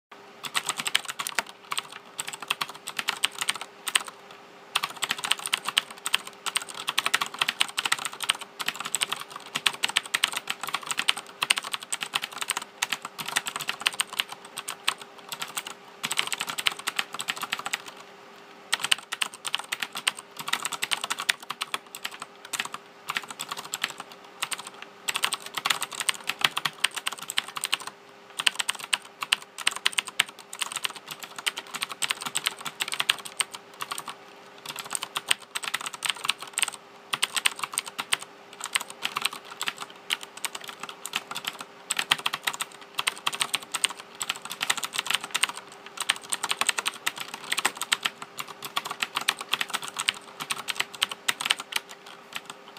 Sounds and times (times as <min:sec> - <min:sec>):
Computer keyboard: 0:00.4 - 0:04.2, 0:04.8 - 0:18.0, 0:18.7 - 0:52.7.